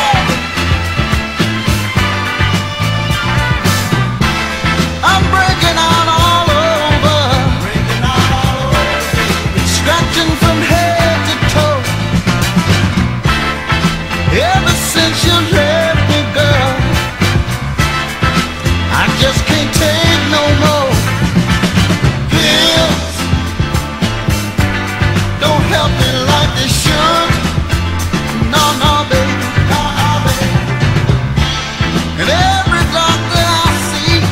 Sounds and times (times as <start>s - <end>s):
Music: 0.0s - 34.3s.